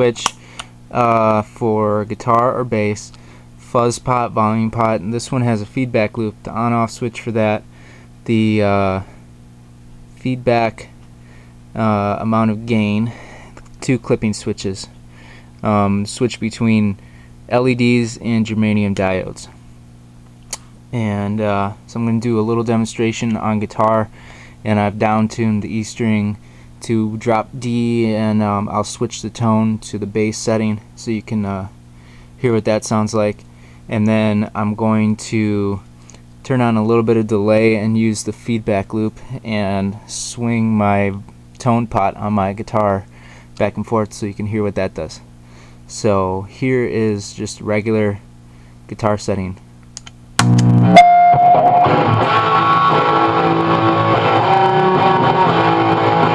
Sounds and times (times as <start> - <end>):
Speech: 0.0 - 0.3, 0.9 - 7.7, 8.3 - 9.1, 10.2 - 11.0, 11.8 - 13.2, 13.8 - 15.0, 15.6 - 19.6, 20.9 - 31.8, 32.4 - 45.3, 45.9 - 48.3, 48.9 - 49.6.